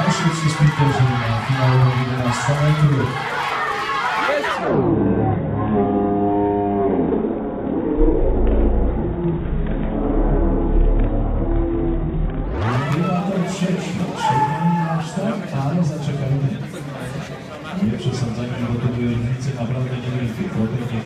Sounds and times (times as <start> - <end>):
Speech: 0.0 - 3.2, 12.7 - 21.0.